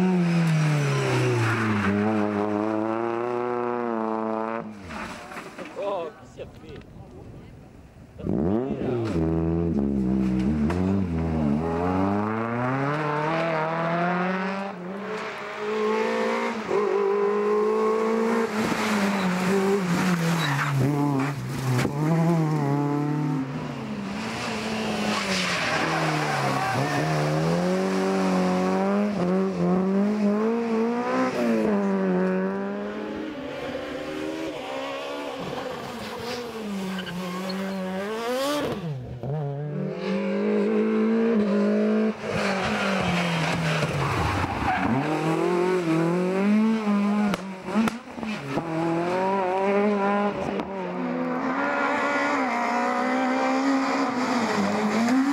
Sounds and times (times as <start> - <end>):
Outside, rural or natural: 0.0 - 55.3
Race car, auto racing: 0.0 - 55.3.